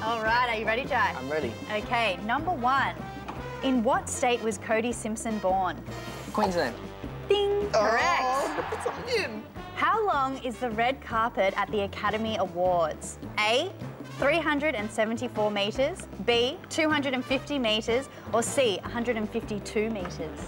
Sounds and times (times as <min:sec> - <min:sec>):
Music: 0:00.0 - 0:20.4.